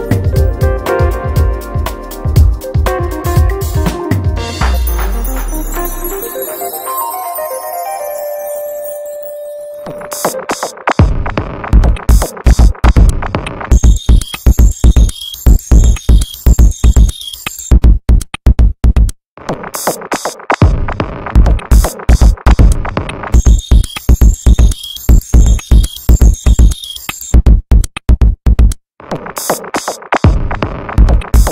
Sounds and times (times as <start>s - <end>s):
Music: 0.0s - 17.9s, 19.5s - 27.6s, 29.0s - 31.5s.